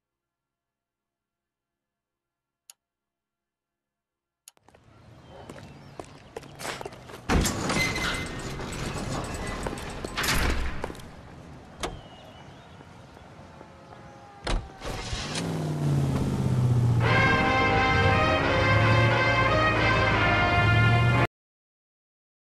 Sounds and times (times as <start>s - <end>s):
Music: 17.0s - 21.3s.